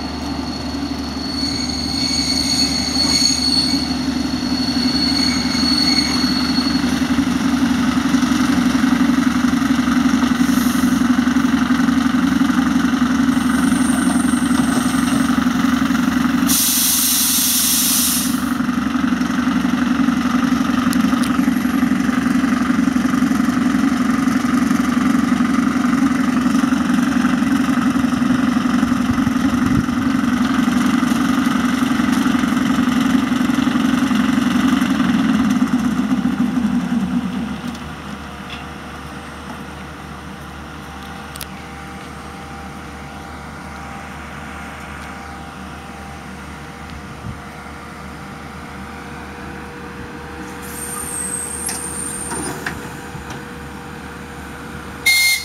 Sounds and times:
Heavy engine (low frequency): 0:00.0 - 0:55.4
Railroad car, train wagon: 0:00.0 - 0:55.4
Train: 0:00.0 - 0:55.4.

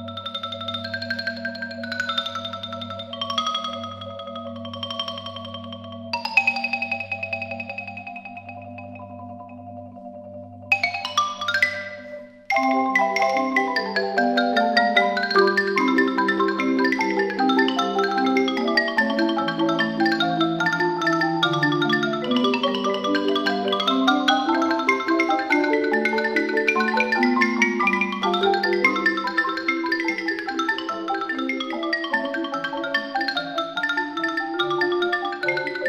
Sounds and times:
Percussion: 0:00.0 - 0:35.8.

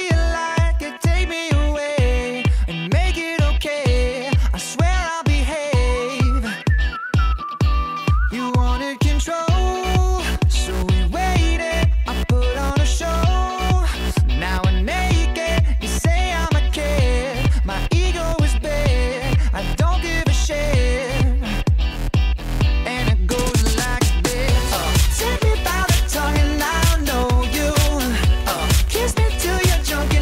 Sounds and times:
Music: 0:00.0 - 0:30.2.

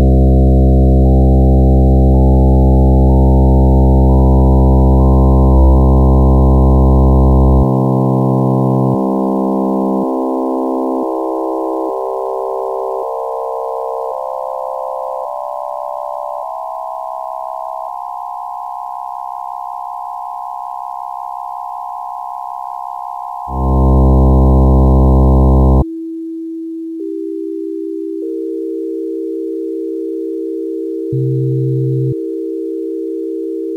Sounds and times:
Music: 0:00.0 - 0:17.8, 0:23.5 - 0:33.7
Harmonic: 0:00.0 - 0:25.9, 0:27.0 - 0:33.7.

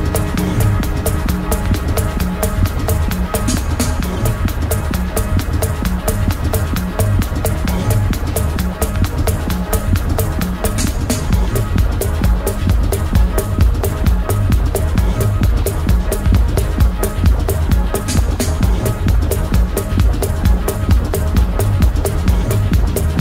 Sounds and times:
Techno: 0:00.0 - 0:23.2.

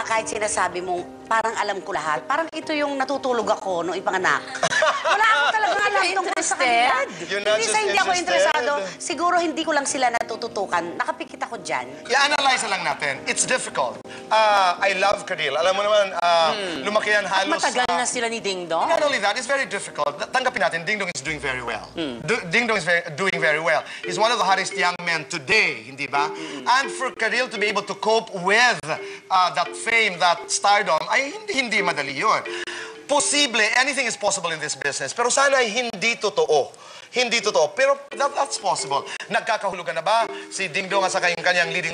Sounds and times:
Music: 0:00.0 - 0:41.9.

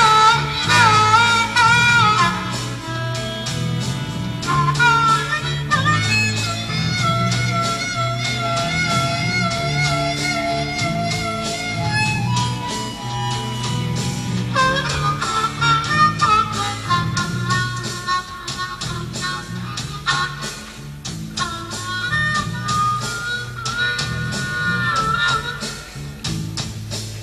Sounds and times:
Bagpipes: 0:00.0 - 0:26.2.

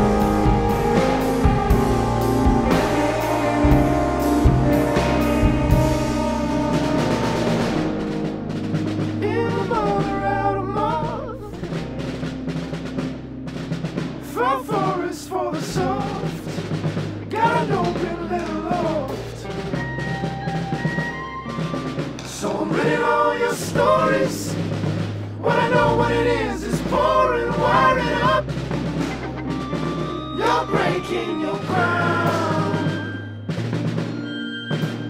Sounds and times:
Timpani: 0:00.0 - 0:35.0.

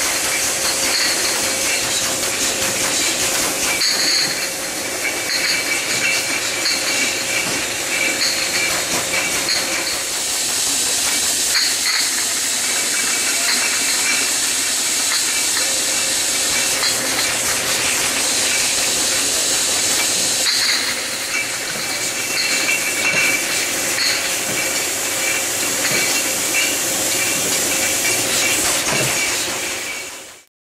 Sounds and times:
Spray: 0:00.0 - 0:30.5.

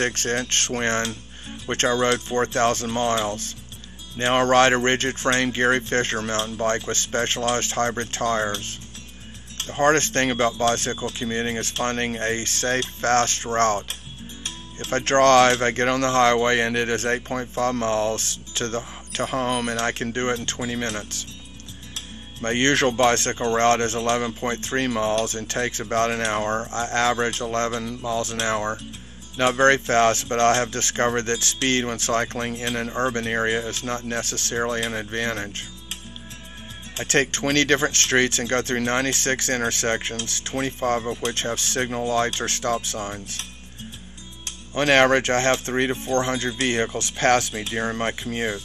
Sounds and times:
Speech: 0:00.0 - 0:03.6, 0:04.2 - 0:08.8, 0:09.6 - 0:13.9, 0:14.8 - 0:21.3, 0:22.4 - 0:28.8, 0:29.4 - 0:35.7, 0:37.0 - 0:43.5, 0:44.8 - 0:48.6
Music: 0:00.0 - 0:48.6.

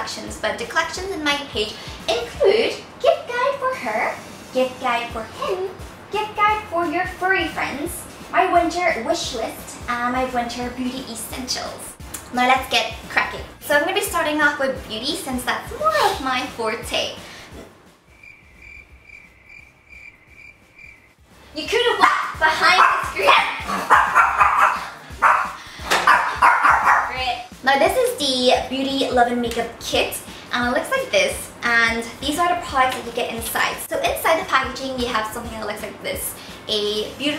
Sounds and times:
Bark: 0:22.0 - 0:27.2
Bow-wow: 0:22.0 - 0:27.2.

